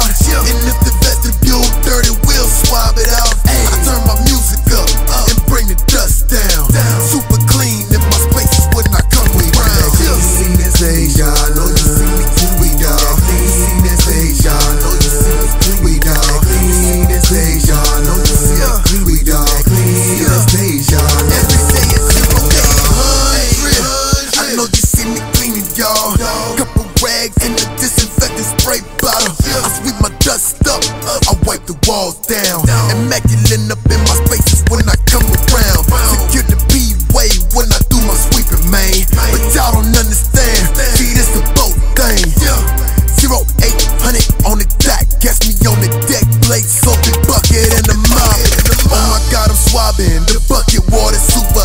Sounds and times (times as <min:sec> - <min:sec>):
Music: 0:00.0 - 0:51.6.